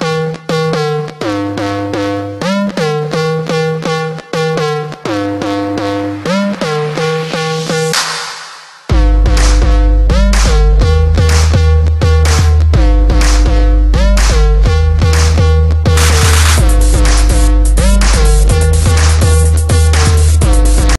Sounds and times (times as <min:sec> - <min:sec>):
Music: 0:00.0 - 0:20.9.